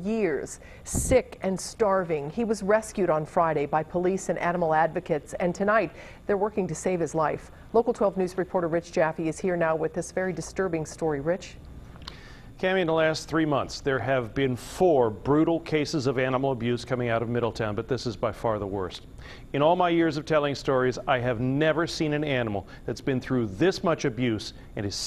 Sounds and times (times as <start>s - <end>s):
Speech: 12.6s - 19.0s, 19.6s - 25.0s.